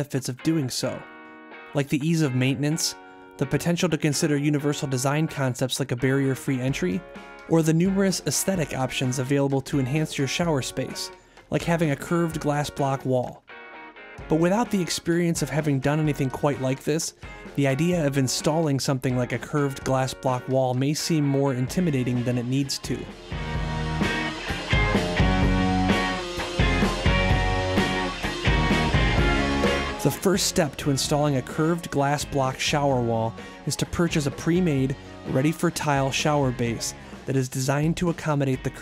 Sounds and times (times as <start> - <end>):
Speech: 0.0 - 1.1, 1.8 - 13.4, 14.3 - 23.1, 30.0 - 38.8
Music: 0.0 - 38.8.